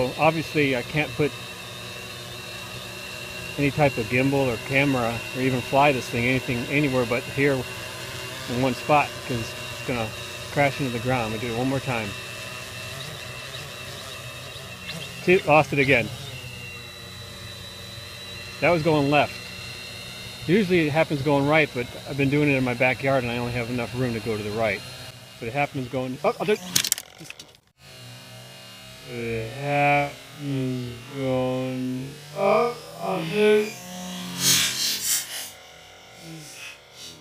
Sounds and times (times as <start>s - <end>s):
Speech: 0.0s - 1.3s, 3.6s - 7.7s, 8.5s - 12.2s, 15.2s - 16.2s, 18.6s - 19.3s, 20.4s - 24.8s, 25.4s - 26.7s, 29.1s - 33.8s.